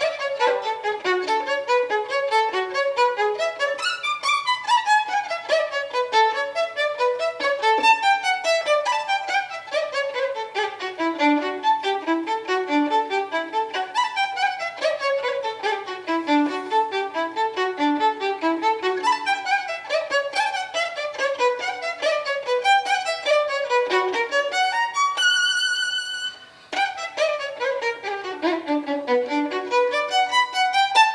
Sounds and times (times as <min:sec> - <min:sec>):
Violin, fiddle: 0:00.0 - 0:31.1.